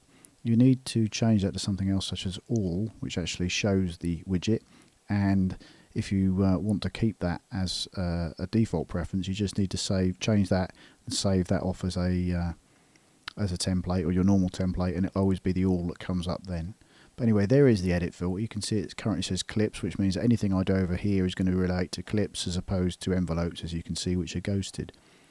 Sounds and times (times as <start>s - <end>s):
Speech: 0.4s - 12.6s, 13.3s - 25.0s.